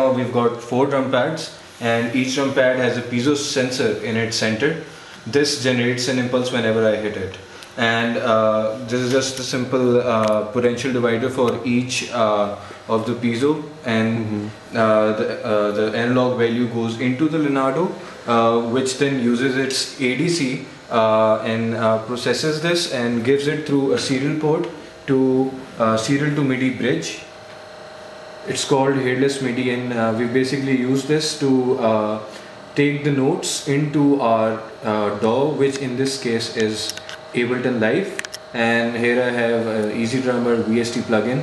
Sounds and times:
Speech: 0:00.0 - 0:27.3, 0:28.5 - 0:41.4.

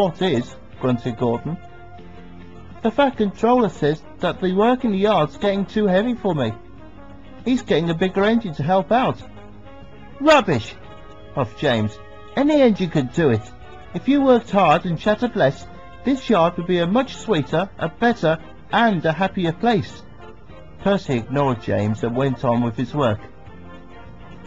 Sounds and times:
Music: 0:00.0 - 0:24.4
Narration, monologue: 0:00.0 - 0:24.4.

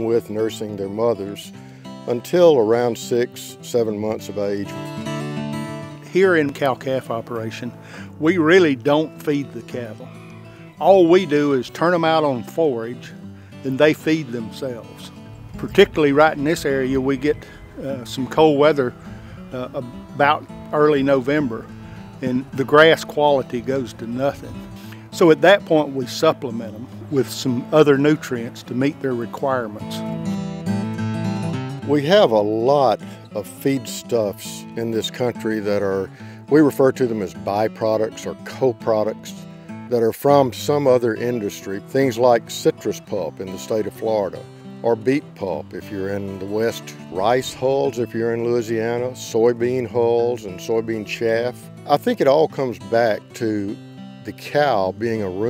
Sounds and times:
Speech: 0:00.0 - 0:01.5, 0:02.1 - 0:04.8, 0:06.1 - 0:10.0, 0:10.8 - 0:30.0, 0:31.8 - 0:55.5
Music: 0:00.0 - 0:55.5.

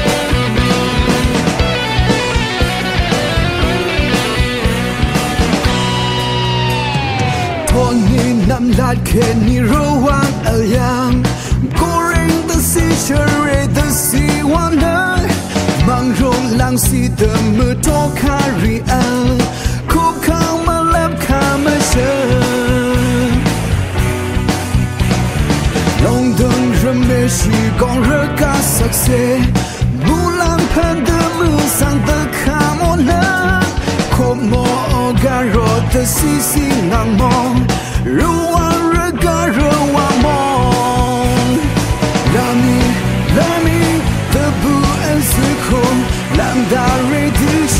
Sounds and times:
Background music: 0:00.0 - 0:47.7.

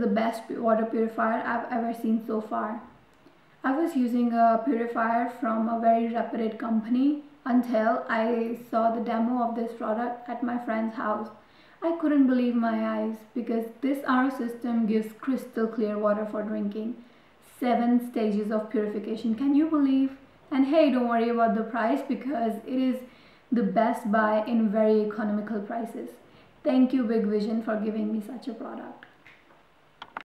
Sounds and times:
Speech: 0:00.0 - 0:03.0, 0:03.6 - 0:29.1.

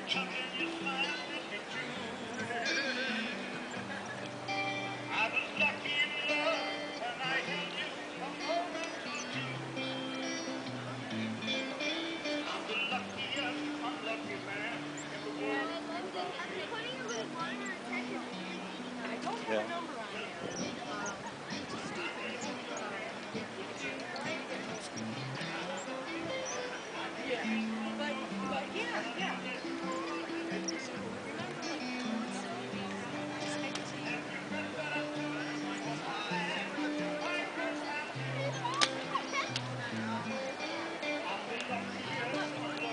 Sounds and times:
Speech: 0:00.0 - 0:11.8, 0:12.4 - 0:42.9
Music: 0:00.0 - 0:42.9.

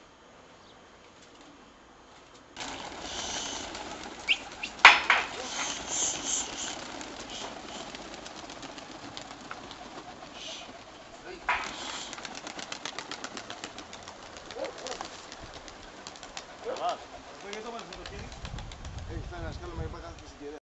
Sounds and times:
Outside, rural or natural: 0:00.0 - 0:20.6
Pigeon, dove: 0:02.6 - 0:18.3
Speech: 0:16.6 - 0:18.4, 0:19.1 - 0:20.6.

